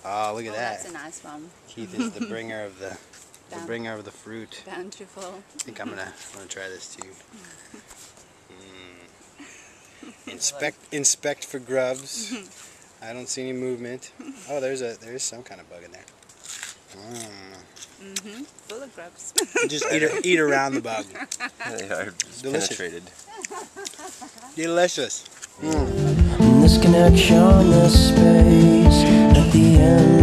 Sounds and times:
Speech: 0.0 - 7.5, 10.3 - 16.0, 17.0 - 23.1, 24.6 - 26.0.

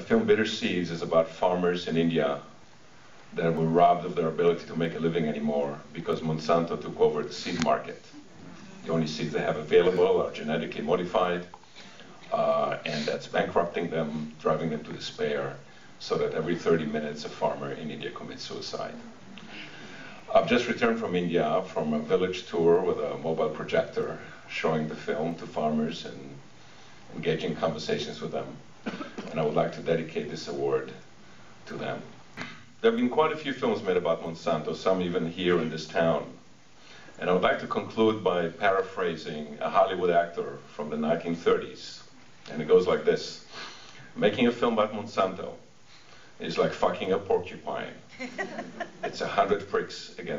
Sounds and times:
Male speech, man speaking: 0.0 - 2.6, 3.4 - 8.2, 8.8 - 11.5, 12.3 - 19.0, 20.3 - 26.4, 27.1 - 28.6, 29.3 - 31.0, 31.7 - 32.1, 32.8 - 36.4, 37.2 - 43.5, 44.2 - 45.7, 46.4 - 48.1, 49.1 - 50.3
Narration, monologue: 0.0 - 50.3.

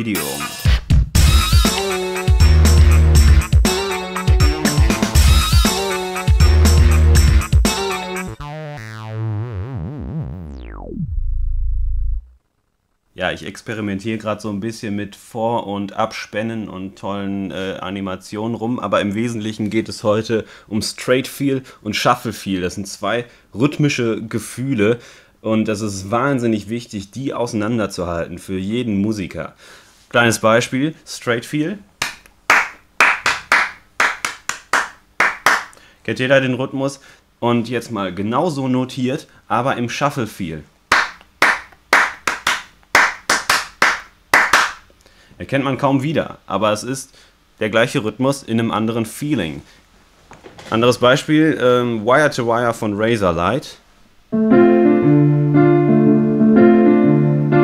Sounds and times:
Speech: 0.0 - 0.5, 13.2 - 31.9, 36.0 - 40.7, 45.4 - 49.7, 50.6 - 53.8
Music: 0.0 - 12.4, 54.4 - 57.6.

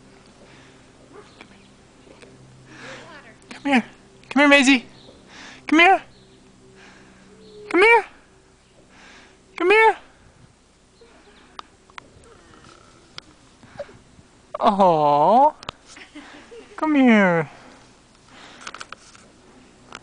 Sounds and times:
Outside, rural or natural: 0.0 - 20.0.

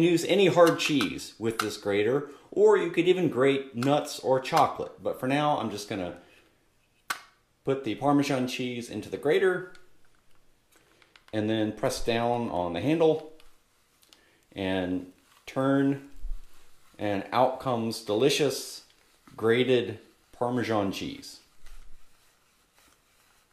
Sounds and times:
Speech: 0.0 - 6.2, 7.6 - 9.8, 11.3 - 13.4, 14.6 - 16.2, 17.0 - 21.5
Inside, small room: 0.0 - 23.5.

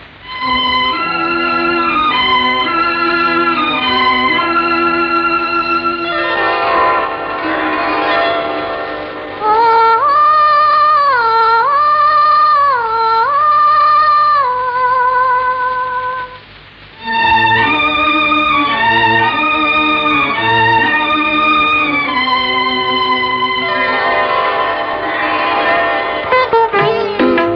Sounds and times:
Music: 0.0 - 14.0, 17.0 - 27.5.

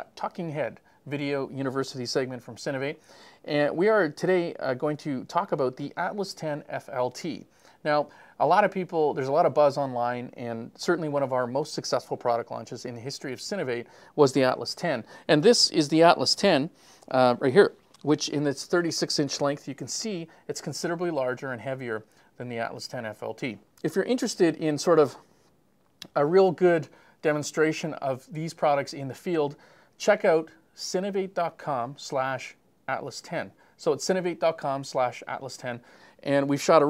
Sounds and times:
Speech: 0.0 - 25.3, 26.0 - 36.8.

